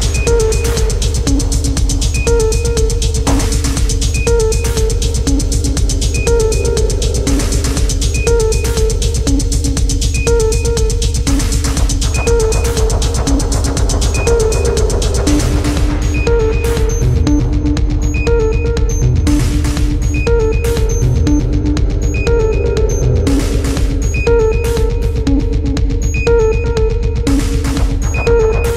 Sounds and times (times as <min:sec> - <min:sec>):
Music: 0:00.0 - 0:28.7.